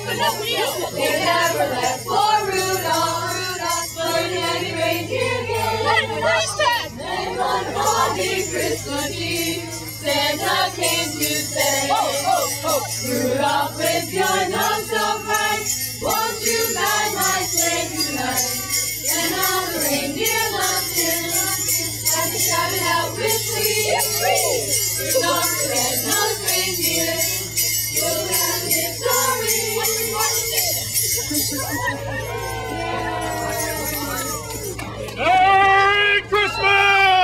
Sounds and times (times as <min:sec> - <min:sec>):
Christian music: 0:06.9 - 0:30.3.